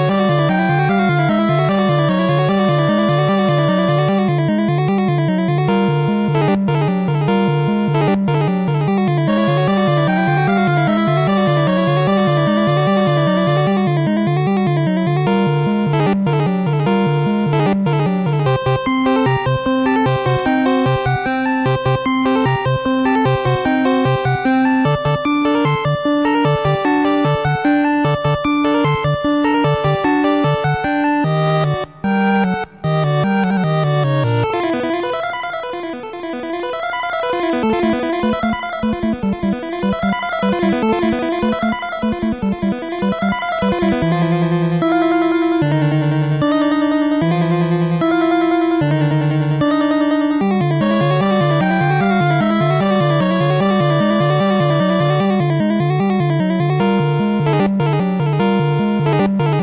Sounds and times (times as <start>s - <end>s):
Video game music: 0.0s - 59.6s.